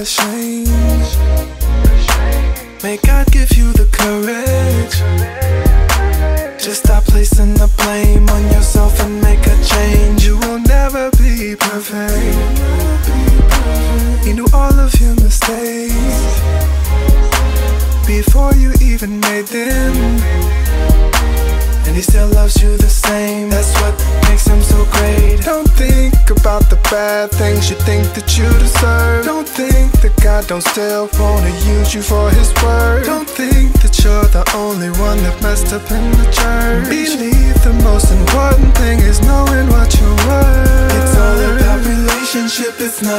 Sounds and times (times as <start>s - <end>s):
Gospel music: 0.0s - 43.1s.